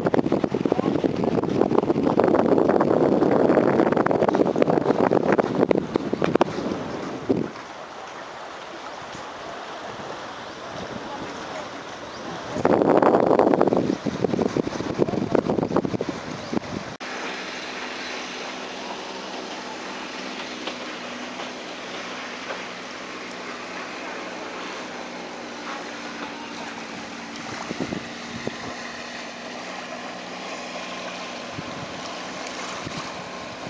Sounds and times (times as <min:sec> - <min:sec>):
Ocean: 0:00.0 - 0:33.7
Outside, rural or natural: 0:00.0 - 0:33.7
Speech: 0:00.7 - 0:01.2, 0:10.6 - 0:12.9.